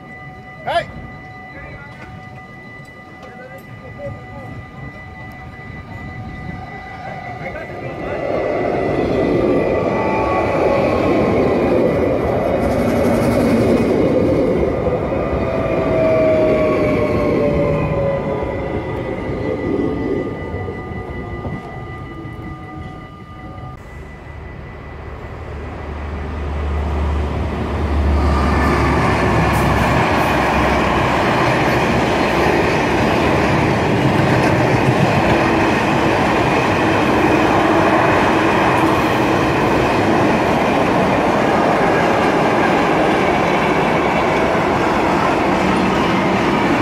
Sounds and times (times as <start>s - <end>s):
Train: 0.0s - 46.8s.